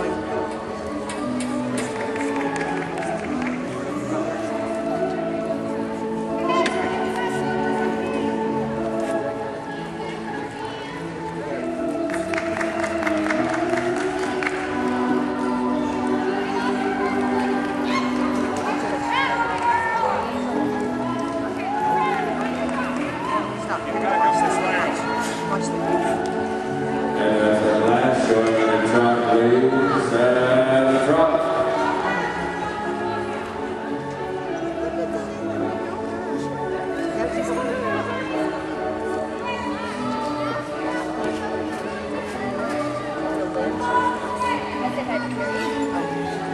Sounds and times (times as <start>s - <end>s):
Music: 0.0s - 46.5s.